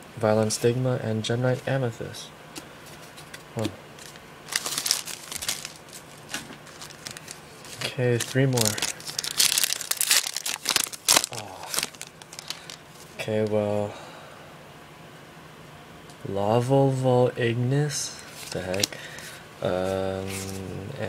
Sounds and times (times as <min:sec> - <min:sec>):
Speech: 0:00.2 - 0:02.3, 0:03.6 - 0:03.8, 0:13.2 - 0:14.0, 0:16.2 - 0:18.9, 0:19.6 - 0:21.0.